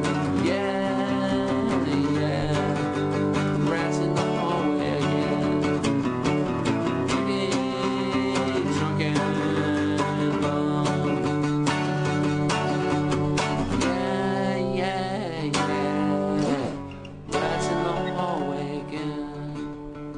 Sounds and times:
Country: 0.0s - 20.1s.

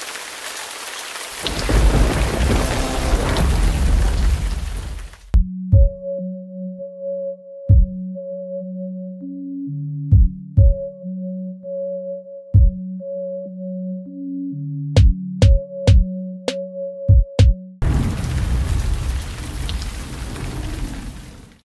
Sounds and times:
Music: 2.4s - 3.9s, 5.3s - 17.8s.

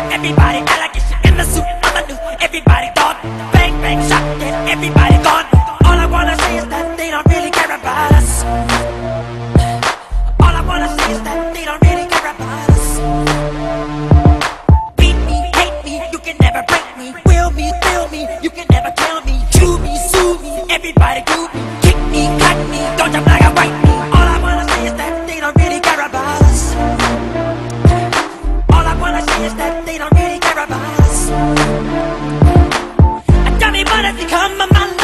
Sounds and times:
Music: 0.0s - 35.0s.

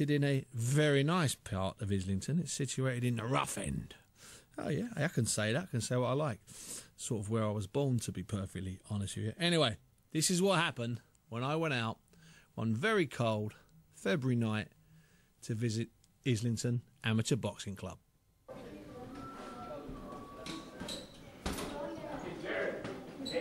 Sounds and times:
Speech: 4.6s - 6.4s, 15.4s - 20.8s.

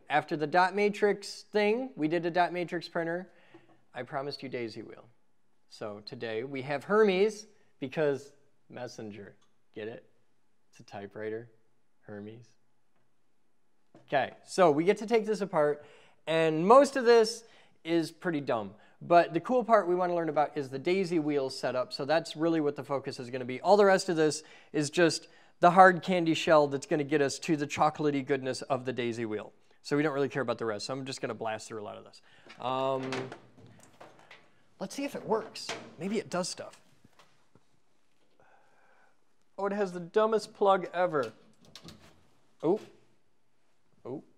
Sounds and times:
Speech: 0.0s - 3.3s, 4.0s - 10.1s, 10.7s - 12.6s, 14.0s - 33.4s, 34.8s - 36.8s, 39.6s - 41.4s, 42.6s - 43.0s, 44.0s - 44.3s.

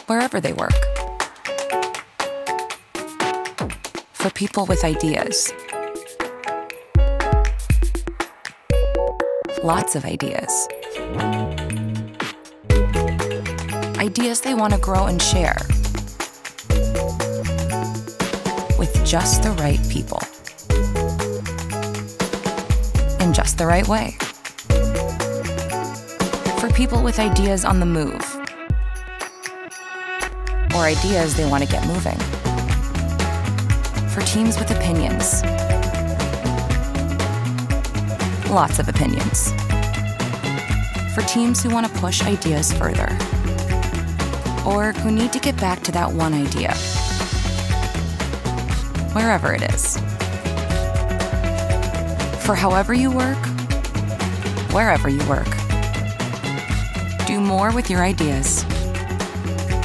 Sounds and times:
Speech: 0.0s - 0.8s, 4.2s - 5.5s, 9.6s - 10.7s, 14.0s - 15.7s, 18.8s - 20.3s, 23.2s - 24.2s, 26.6s - 28.4s, 30.7s - 32.3s, 34.1s - 35.4s, 38.5s - 39.5s, 41.2s - 43.2s, 44.6s - 46.9s, 49.2s - 50.0s, 52.4s - 53.5s, 54.7s - 55.6s, 57.2s - 58.7s
Music: 0.0s - 59.8s.

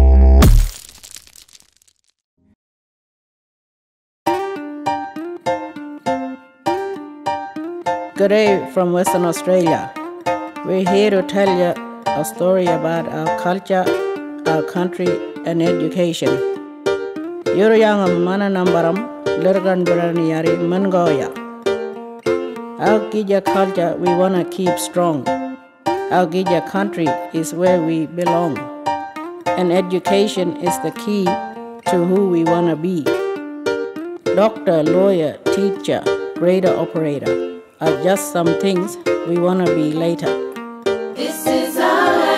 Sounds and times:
Music: 0.0s - 0.7s, 4.3s - 42.3s
Speech: 8.2s - 9.9s, 10.7s - 16.4s, 17.6s - 21.4s, 22.8s - 25.3s, 26.1s - 28.7s, 29.6s - 33.1s, 34.4s - 40.4s.

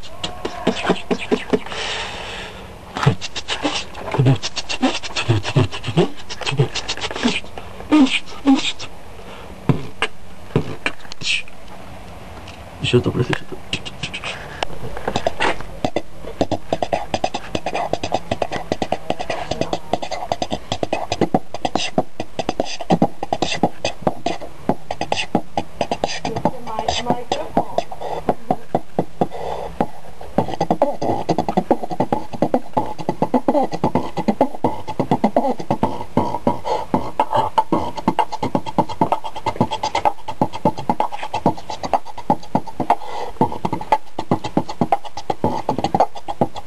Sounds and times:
Beatboxing: 0.0s - 9.0s, 9.6s - 11.6s, 12.8s - 46.6s.

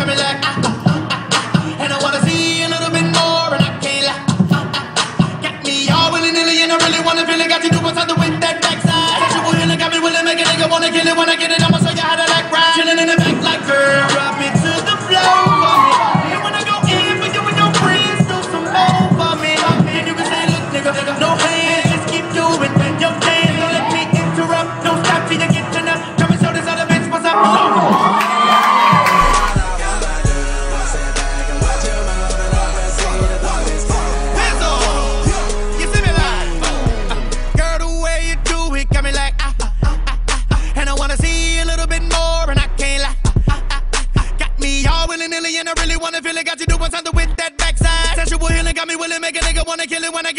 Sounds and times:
Beatboxing: 0.0s - 50.3s.

